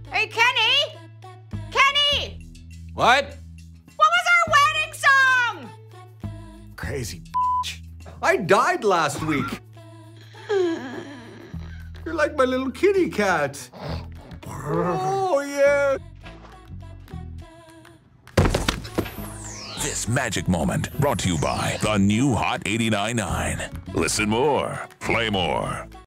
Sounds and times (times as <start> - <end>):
Music: 0.0 - 26.0
Thump, thud: 18.4 - 19.2
Speech: 19.8 - 25.9.